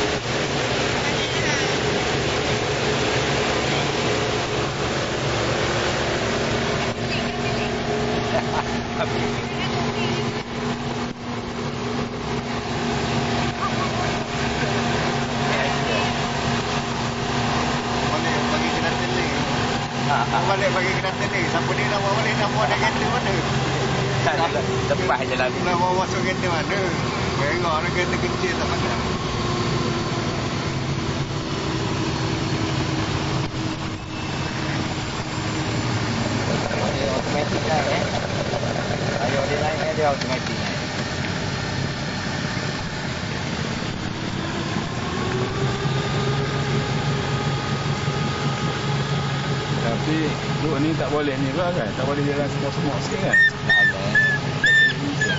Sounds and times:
Motorboat, speedboat: 0:00.0 - 0:55.3.

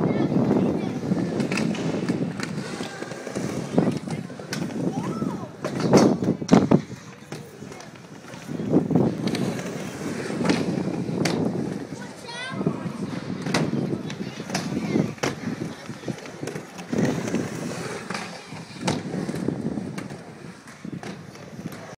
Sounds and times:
Speech: 0:00.0 - 0:01.4, 0:02.7 - 0:05.6, 0:07.0 - 0:08.8, 0:11.8 - 0:16.9.

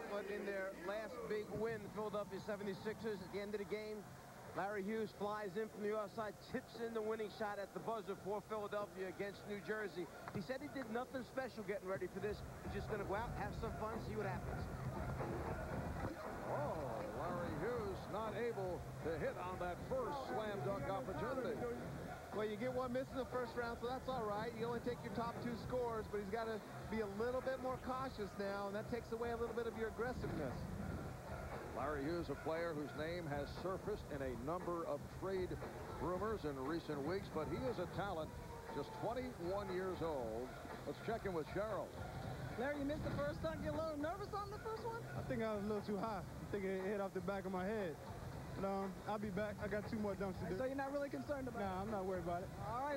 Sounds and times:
Speech: 0:16.1 - 0:30.6, 0:31.8 - 0:41.9.

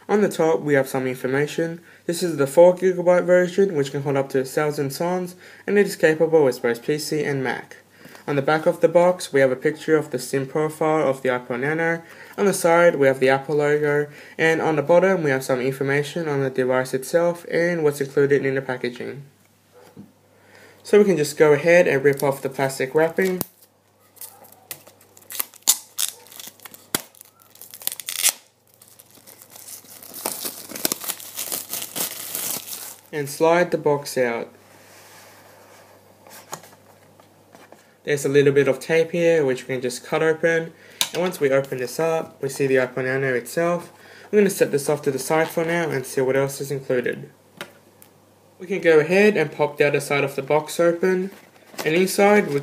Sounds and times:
Inside, small room: 0:00.0 - 0:52.6
Speech: 0:00.1 - 0:19.3, 0:20.8 - 0:23.5, 0:33.1 - 0:34.6, 0:38.1 - 0:47.4, 0:48.6 - 0:52.6
Tearing: 0:23.2 - 0:33.1.

